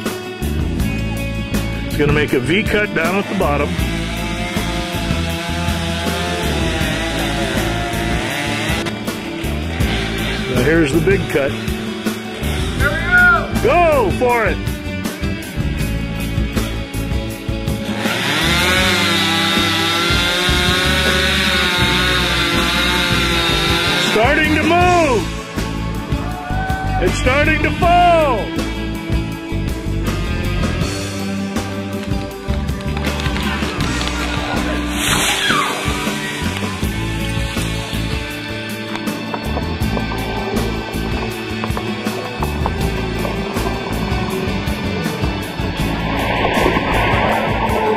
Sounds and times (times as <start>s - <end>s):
Music: 0.0s - 47.9s
Speech: 2.0s - 3.7s, 10.5s - 11.6s, 12.8s - 14.6s, 24.1s - 25.3s, 27.0s - 28.5s.